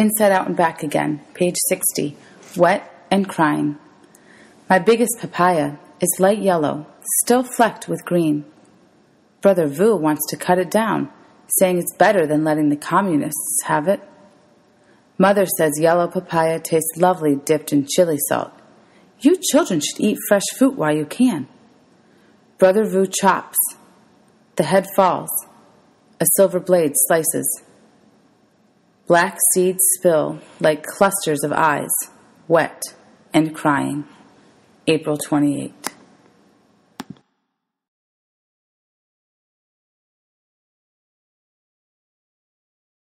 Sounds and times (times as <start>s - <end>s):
Speech: 0.0s - 3.8s, 4.7s - 8.5s, 9.4s - 14.1s, 15.2s - 18.6s, 19.2s - 21.6s, 22.6s - 23.9s, 24.6s - 25.6s, 26.2s - 27.7s, 29.1s - 34.2s, 34.9s - 36.0s.